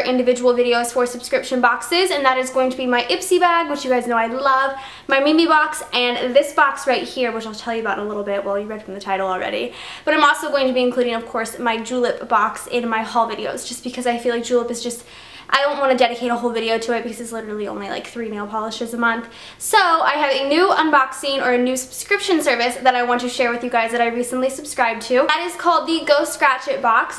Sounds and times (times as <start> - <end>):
Speech: 0.0 - 27.1.